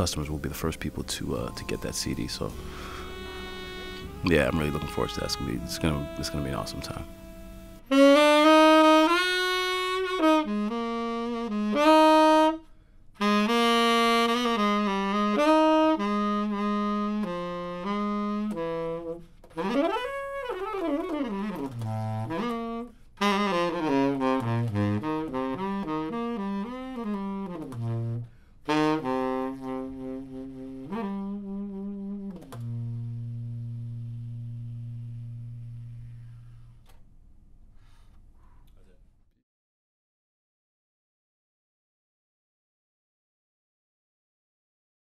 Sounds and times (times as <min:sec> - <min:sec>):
Brass instrument: 0:00.0 - 0:36.6
Saxophone: 0:00.0 - 0:37.0.